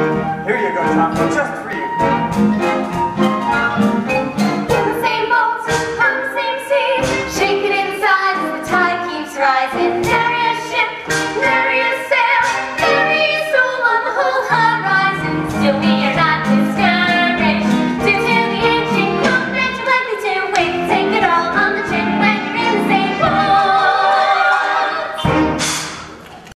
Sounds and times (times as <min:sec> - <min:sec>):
Music: 0:00.0 - 0:26.5.